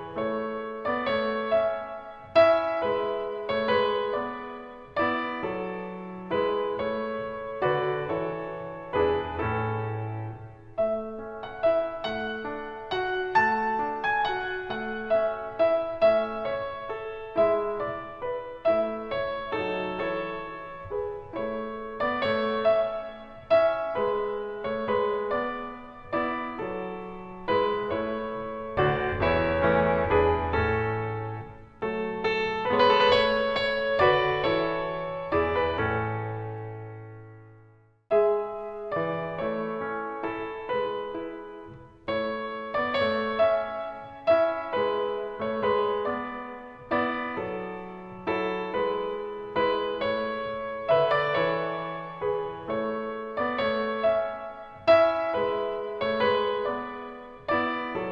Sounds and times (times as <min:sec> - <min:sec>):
Music: 0:00.0 - 0:58.1.